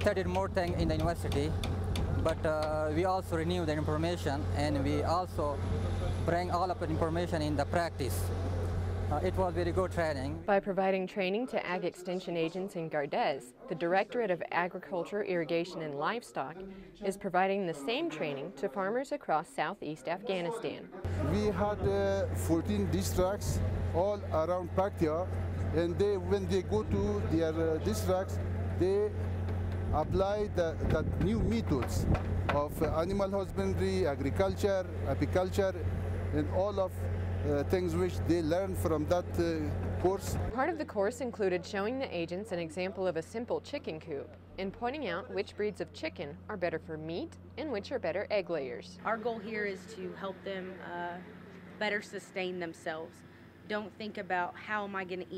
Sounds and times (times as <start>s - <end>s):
Speech: 9.1s - 29.1s, 30.0s - 35.8s.